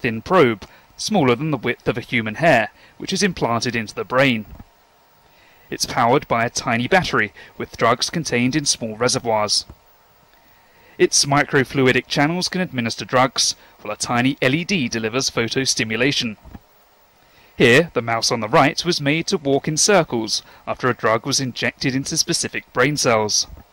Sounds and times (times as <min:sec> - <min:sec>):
Speech: 0:00.0 - 0:04.5, 0:05.7 - 0:09.8, 0:11.0 - 0:16.4, 0:17.6 - 0:23.6.